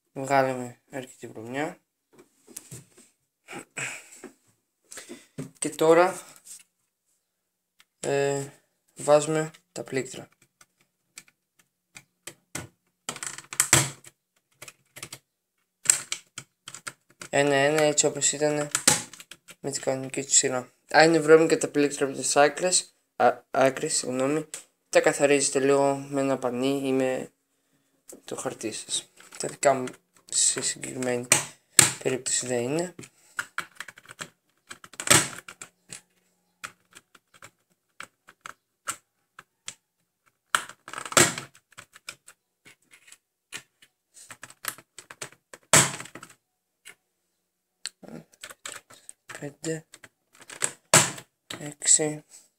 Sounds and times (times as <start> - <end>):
Speech: 0.2 - 1.8, 5.6 - 6.3, 8.0 - 10.3, 17.3 - 18.7, 19.6 - 27.3, 28.1 - 31.3, 32.0 - 33.0, 49.4 - 49.9, 51.5 - 52.3
Computer keyboard: 33.4 - 36.0, 36.6 - 39.0, 40.5 - 42.3.